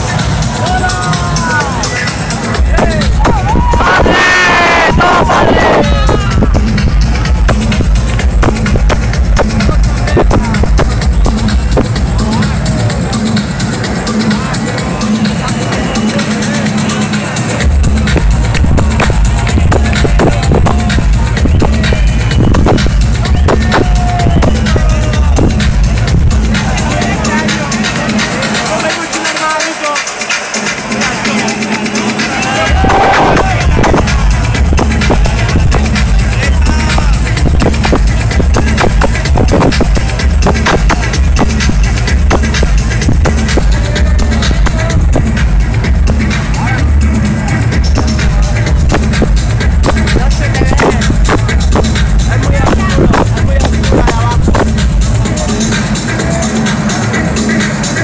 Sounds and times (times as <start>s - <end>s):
Speech: 0.0s - 7.5s, 9.4s - 18.2s, 18.8s - 41.2s, 49.8s - 57.1s
Crowd: 0.0s - 58.0s
Music: 0.0s - 58.0s.